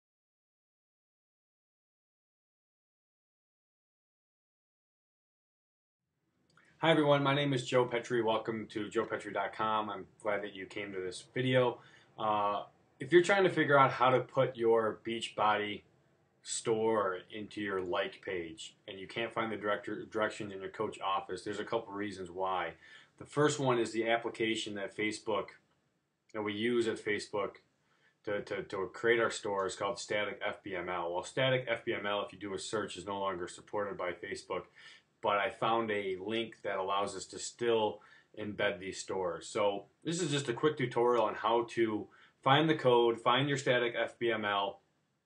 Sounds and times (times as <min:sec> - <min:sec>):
Speech: 0:06.8 - 0:15.8, 0:16.4 - 0:25.6, 0:26.3 - 0:27.6, 0:28.3 - 0:44.8.